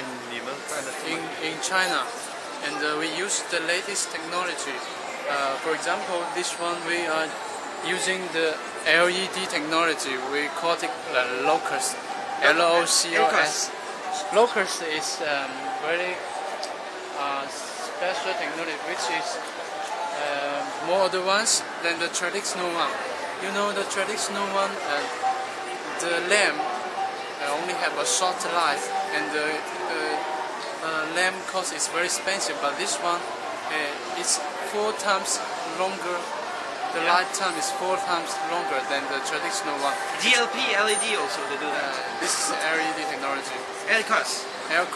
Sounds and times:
Speech: 0:00.0 - 0:16.2, 0:17.2 - 0:19.6, 0:20.2 - 0:25.4, 0:26.0 - 0:44.9.

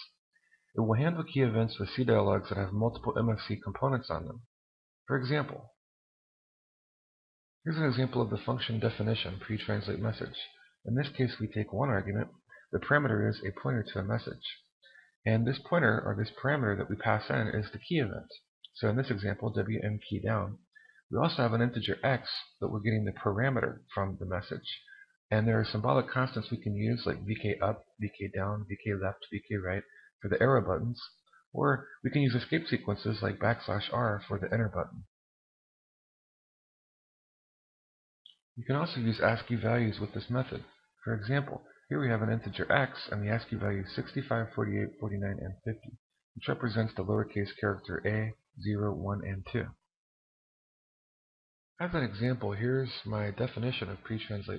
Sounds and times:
Speech: 0:00.0 - 0:04.5, 0:05.1 - 0:05.8, 0:07.7 - 0:35.1, 0:38.3 - 0:49.9, 0:51.8 - 0:54.5.

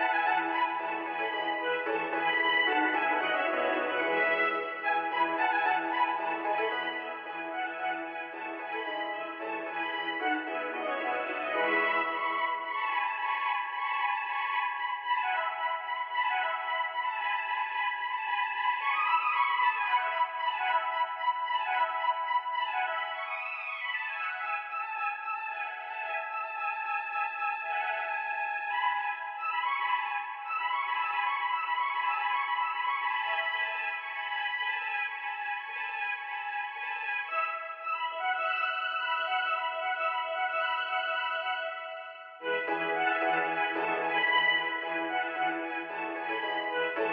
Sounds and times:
Music: 0:00.0 - 0:47.1.

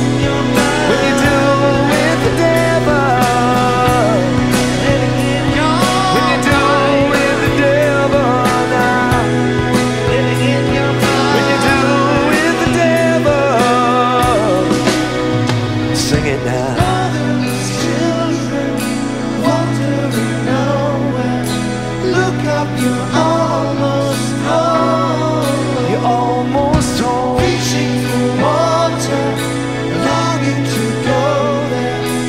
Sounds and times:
Drum: 0:00.0 - 0:17.3, 0:26.6 - 0:28.2
Guitar: 0:00.0 - 0:32.2
Independent music: 0:00.0 - 0:32.2
Progressive rock: 0:00.0 - 0:32.2.

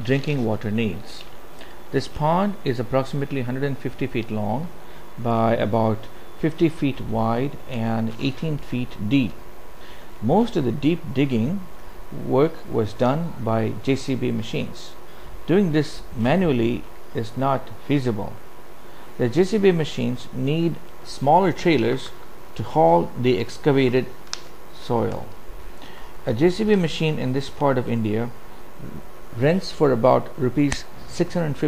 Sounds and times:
Speech: 0:00.0 - 0:01.3, 0:01.9 - 0:09.4, 0:10.2 - 0:18.4, 0:19.2 - 0:24.1, 0:24.8 - 0:25.4, 0:26.2 - 0:31.6.

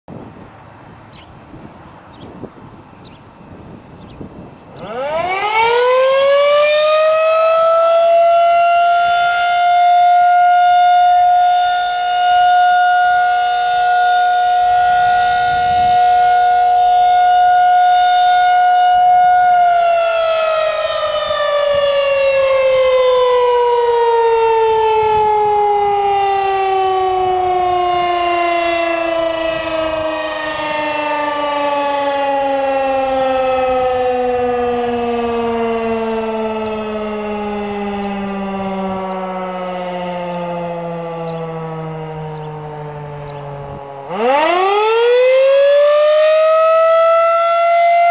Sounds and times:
Civil defense siren: 0:04.3 - 0:48.1.

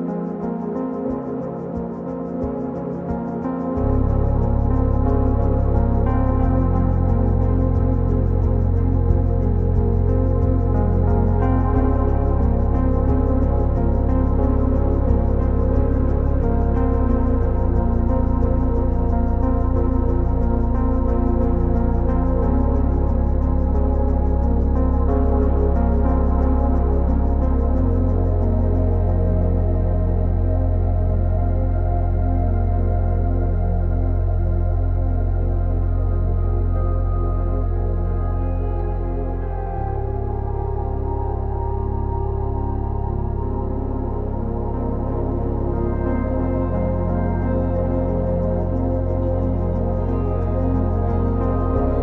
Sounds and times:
Ambient music: 0:00.0 - 0:52.0
Background music: 0:00.0 - 0:52.0.

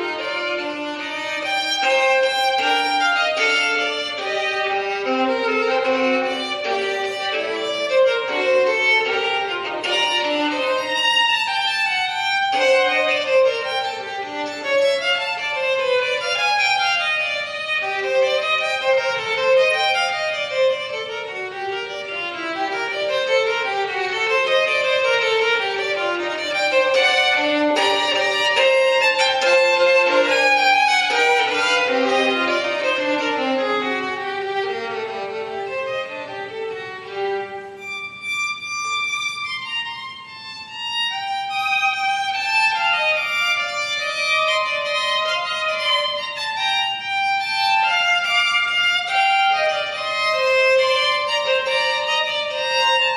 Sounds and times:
Violin, fiddle: 0:00.0 - 0:53.1.

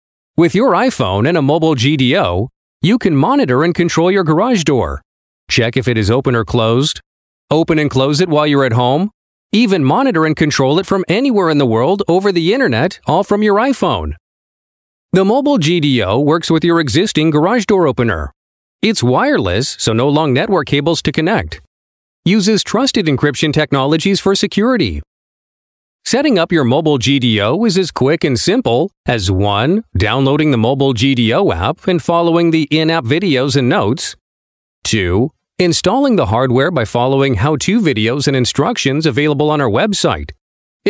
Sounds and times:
Speech: 0:00.4 - 0:14.2, 0:15.2 - 0:21.7, 0:22.3 - 0:25.1, 0:26.0 - 0:34.2, 0:34.8 - 0:40.9.

